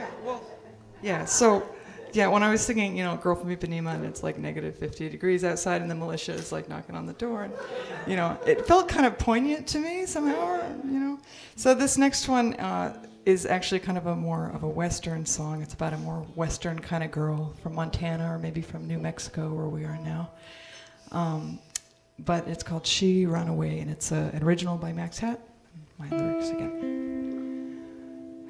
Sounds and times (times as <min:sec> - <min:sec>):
Speech: 0:00.2 - 0:20.3, 0:21.1 - 0:21.6, 0:22.2 - 0:26.8
Music: 0:11.6 - 0:14.6, 0:18.6 - 0:22.6, 0:26.0 - 0:28.5.